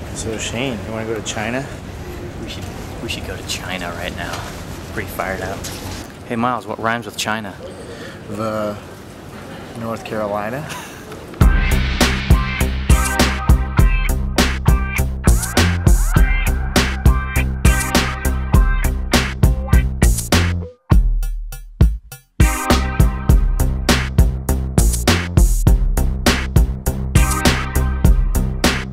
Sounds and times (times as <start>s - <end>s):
Drum machine: 11.4s - 28.9s.